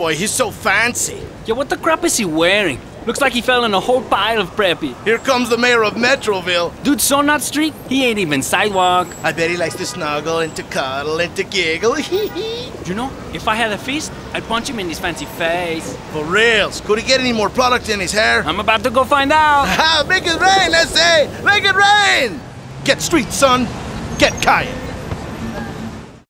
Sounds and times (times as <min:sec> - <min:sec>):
Outside, urban or manmade: 0:00.0 - 0:26.2.